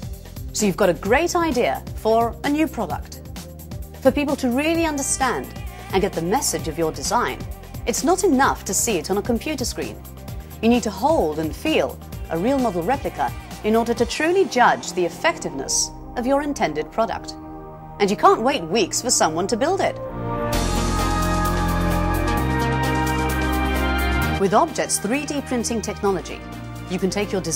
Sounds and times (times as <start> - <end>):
Music: 0.0 - 27.5
Speech: 0.6 - 3.2, 4.0 - 10.0, 10.6 - 17.4, 18.0 - 20.0, 24.4 - 27.5.